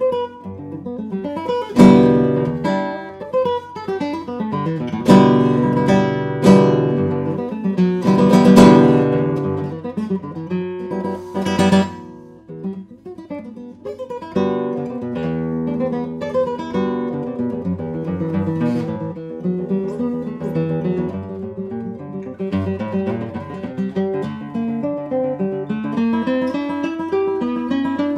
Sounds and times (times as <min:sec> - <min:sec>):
Acoustic guitar: 0:00.0 - 0:28.1.